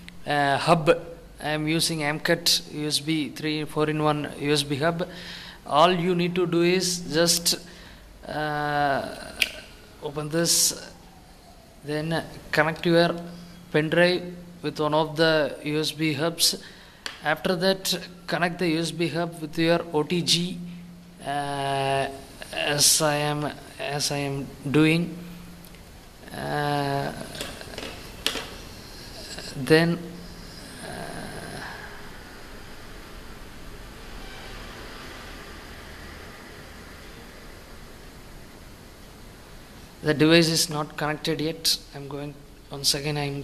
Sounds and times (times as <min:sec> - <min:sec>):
Inside, small room: 0:00.0 - 0:43.4
Speech: 0:00.2 - 0:05.1, 0:05.7 - 0:11.0, 0:11.8 - 0:16.6, 0:17.2 - 0:20.6, 0:21.2 - 0:25.2, 0:26.3 - 0:27.9, 0:29.2 - 0:31.8, 0:40.0 - 0:43.4.